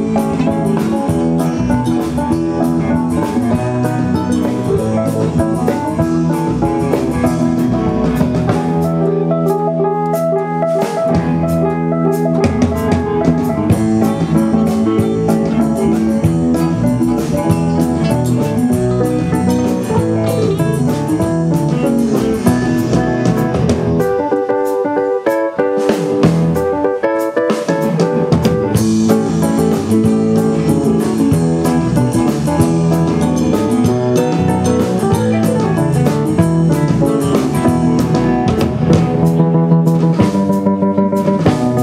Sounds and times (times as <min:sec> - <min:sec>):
Strum: 0:00.0 - 0:24.3, 0:27.8 - 0:41.8.